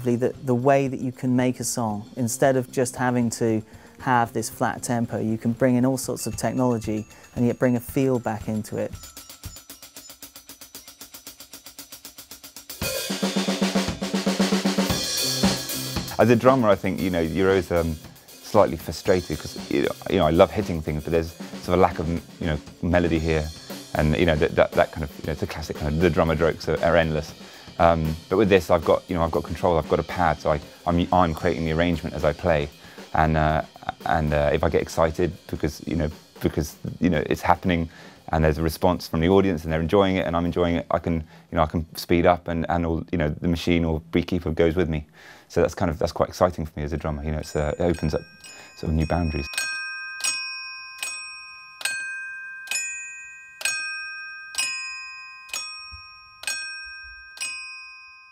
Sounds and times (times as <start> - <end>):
Speech: 0.0 - 9.0, 16.1 - 49.5.